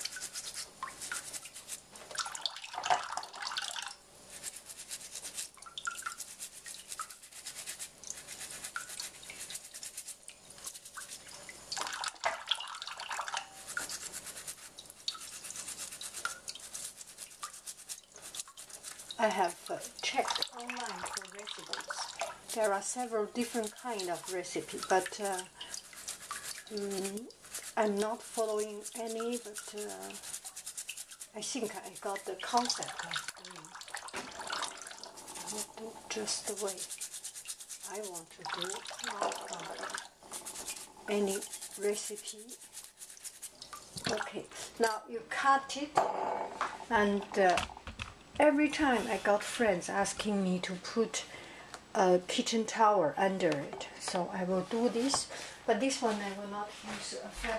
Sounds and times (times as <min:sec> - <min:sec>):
Toothbrush: 0:00.0 - 0:02.5, 0:03.5 - 0:44.2.